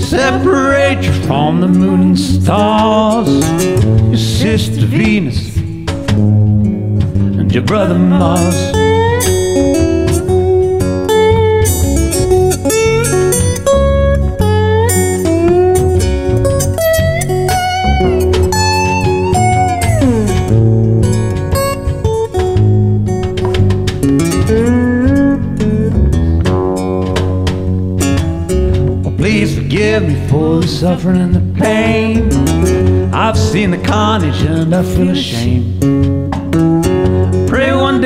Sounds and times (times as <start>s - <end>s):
Guitar: 0.0s - 38.0s.